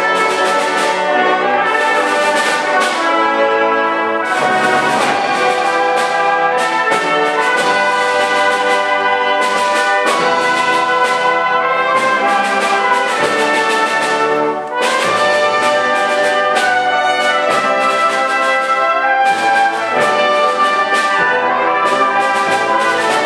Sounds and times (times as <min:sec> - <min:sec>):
Orchestra: 0:00.0 - 0:23.2
Percussion: 0:00.0 - 0:23.2
Trumpet: 0:00.0 - 0:23.2.